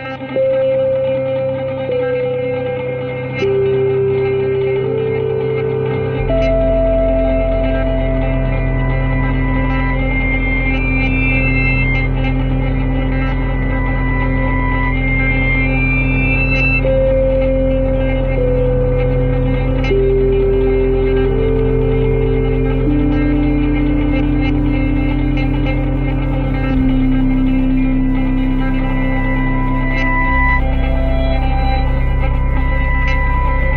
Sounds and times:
Music: 0.0 - 33.7.

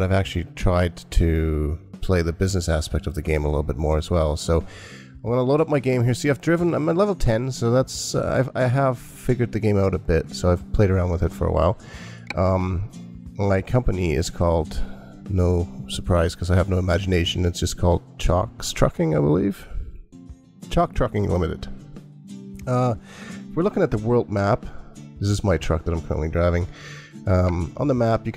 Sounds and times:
Speech: 0.0 - 19.9, 20.7 - 21.8, 22.6 - 28.3
Music: 0.0 - 28.3.

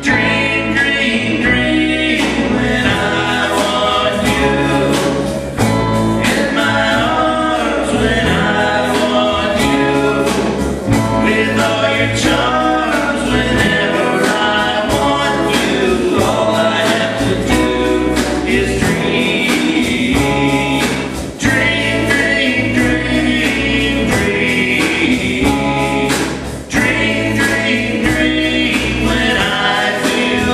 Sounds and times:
Country: 0.0 - 30.5.

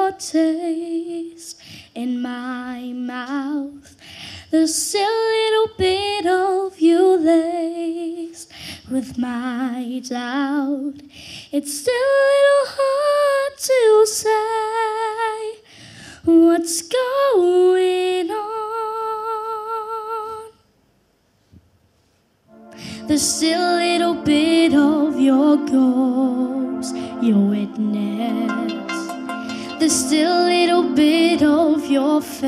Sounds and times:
Female singing: 0.0 - 3.9, 4.5 - 11.0, 11.6 - 15.6, 16.2 - 20.6, 22.9 - 32.4
Music: 22.5 - 32.4
Child singing: 23.1 - 29.1.

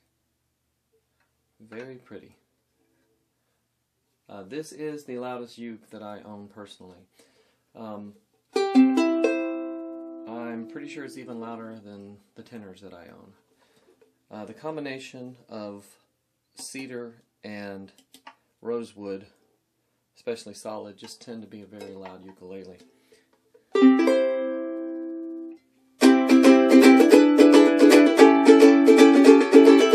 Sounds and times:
Speech: 1.6 - 2.4, 4.3 - 7.1, 7.8 - 8.2, 10.3 - 13.4, 14.3 - 18.0, 18.6 - 19.4, 20.2 - 22.8
Music: 8.6 - 11.4, 23.7 - 29.9.

